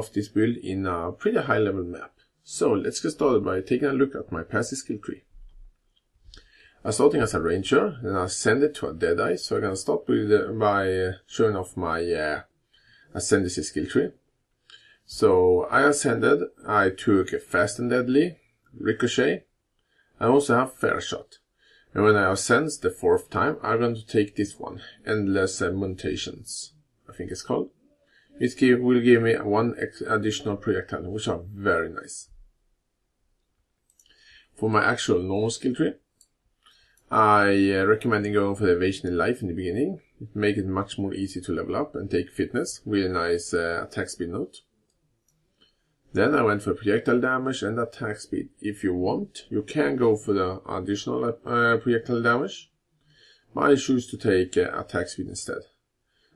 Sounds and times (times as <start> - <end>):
Speech: 0.0 - 5.3, 6.8 - 12.4, 13.1 - 14.2, 15.1 - 19.4, 20.2 - 27.7, 28.3 - 32.4, 34.6 - 36.0, 37.1 - 44.6, 46.2 - 52.6, 53.6 - 55.7.